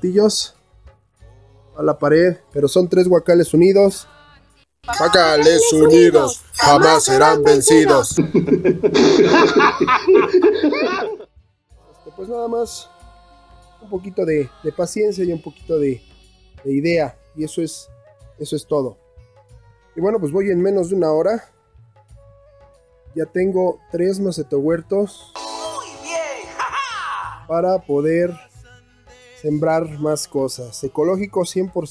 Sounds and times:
Speech: 0.0s - 0.5s, 1.8s - 4.0s, 4.9s - 8.2s, 12.0s - 12.9s, 13.8s - 16.0s, 16.7s - 17.8s, 18.4s - 19.0s, 20.0s - 21.5s, 23.1s - 28.5s, 29.4s - 31.9s.

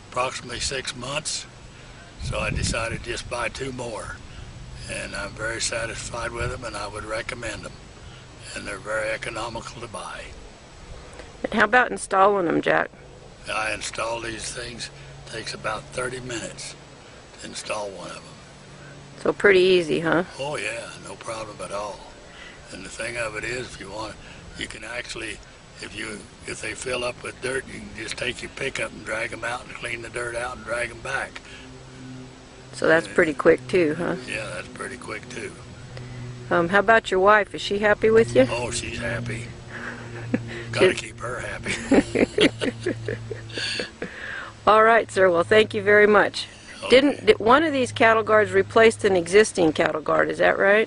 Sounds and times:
Speech: 0.2s - 1.5s, 2.2s - 4.2s, 4.8s - 7.7s, 8.4s - 10.4s, 13.5s - 16.8s, 17.4s - 18.3s, 19.2s - 22.1s, 22.7s - 31.4s, 32.8s - 35.6s, 36.6s - 39.5s, 40.8s - 41.7s, 44.7s - 50.8s.

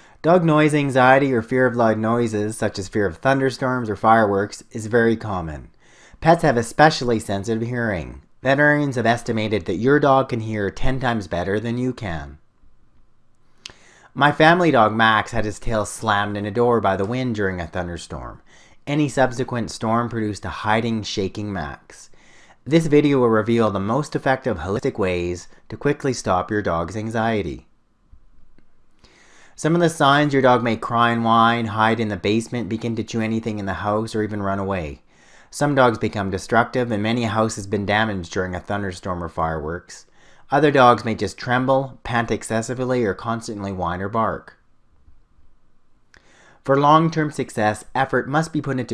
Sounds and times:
Narration, monologue: 0.0s - 48.9s.

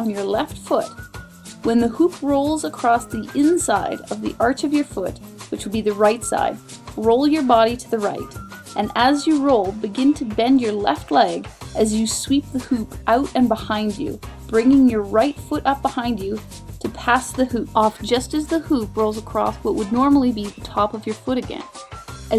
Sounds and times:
Speech: 0.0s - 0.9s, 1.7s - 21.7s
Music: 0.0s - 22.3s.

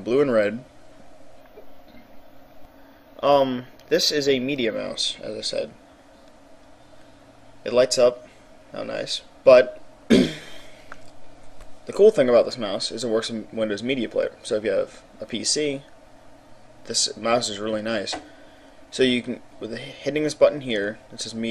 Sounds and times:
Speech: 0.0s - 0.7s, 3.2s - 5.8s, 7.6s - 9.8s, 11.9s - 15.9s, 16.8s - 18.2s, 18.9s - 21.5s.

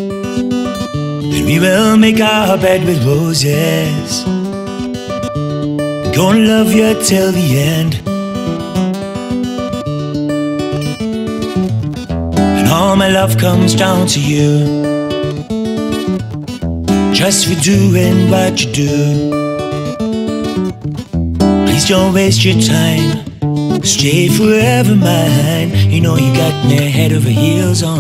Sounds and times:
Blues: 0.0s - 28.0s.

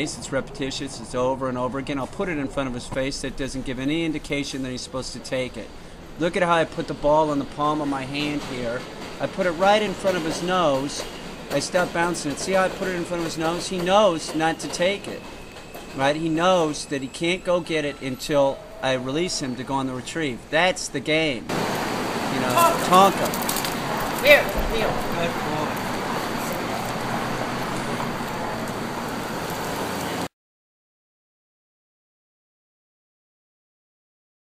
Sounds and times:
Traffic noise, roadway noise: 21.5s - 30.3s.

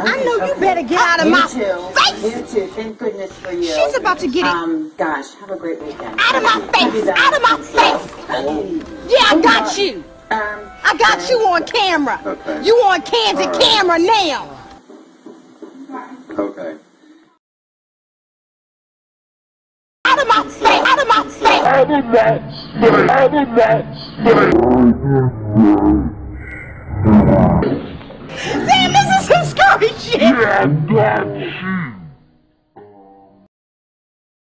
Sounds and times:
Speech: 20.1s - 26.1s, 28.6s - 31.8s.

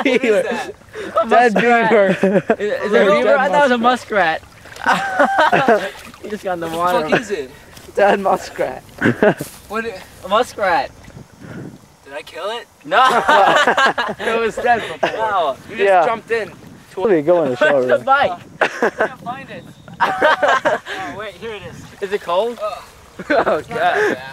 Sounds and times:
Outside, rural or natural: 0.0s - 24.3s.

